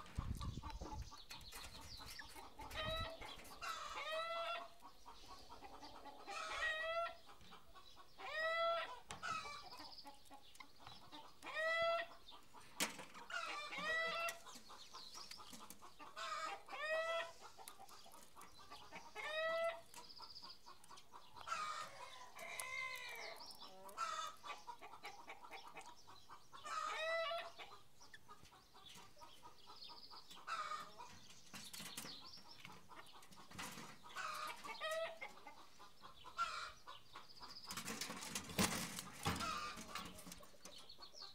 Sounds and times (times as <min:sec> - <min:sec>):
Cluck: 0:00.0 - 0:41.3.